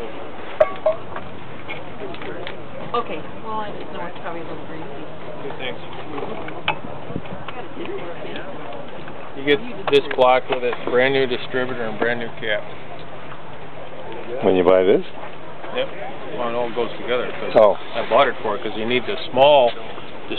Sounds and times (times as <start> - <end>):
Outside, urban or manmade: 0.0 - 20.3.